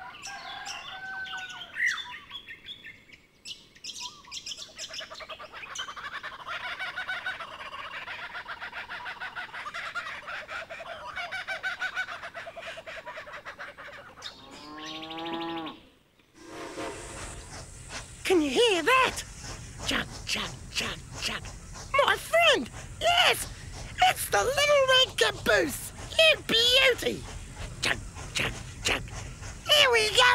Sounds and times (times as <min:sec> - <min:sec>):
Speech: 0:18.2 - 0:19.2, 0:19.8 - 0:30.3.